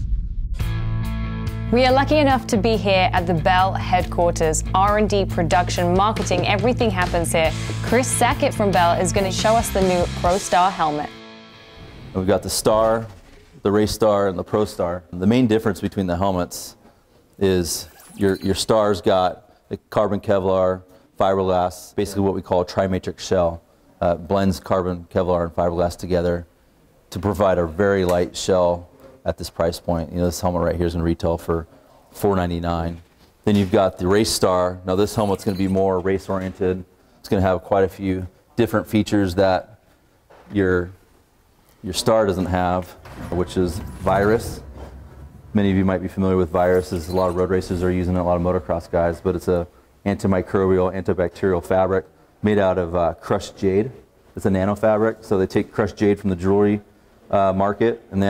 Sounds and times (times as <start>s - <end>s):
Speech: 1.7s - 11.1s, 12.2s - 16.8s, 17.4s - 26.5s, 27.1s - 39.8s, 40.5s - 41.0s, 41.8s - 44.6s, 45.6s - 58.2s.